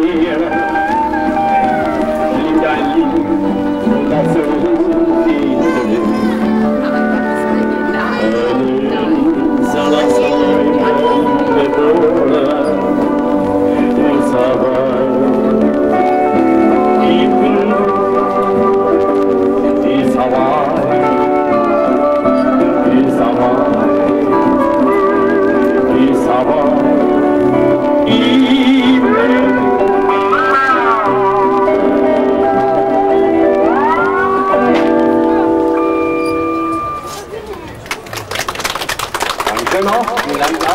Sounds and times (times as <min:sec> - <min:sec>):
Steel guitar, slide guitar: 0:00.0 - 0:37.4.